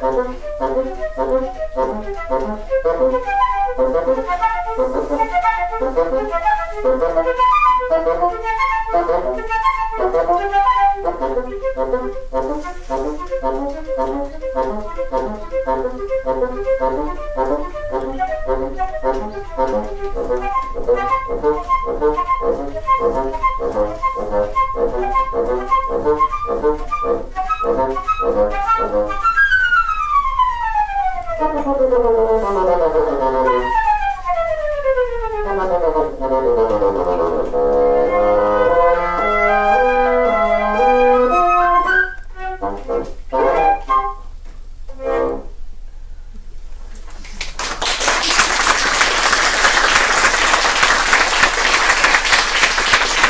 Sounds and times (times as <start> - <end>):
Flute: 0.0 - 45.6.